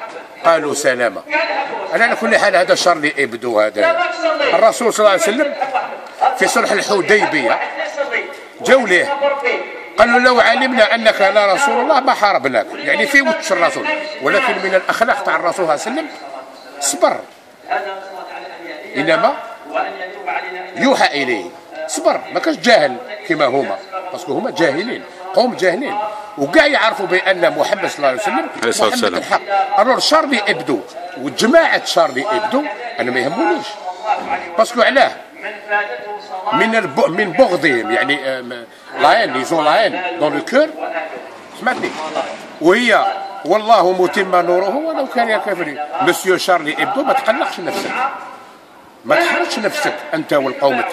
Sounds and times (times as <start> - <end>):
Speech: 0.0 - 48.4, 49.0 - 50.9.